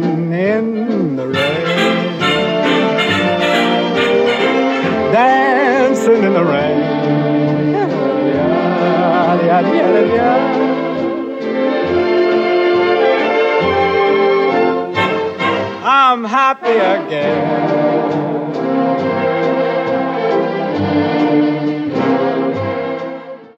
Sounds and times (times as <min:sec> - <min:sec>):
Music: 0:00.0 - 0:23.5.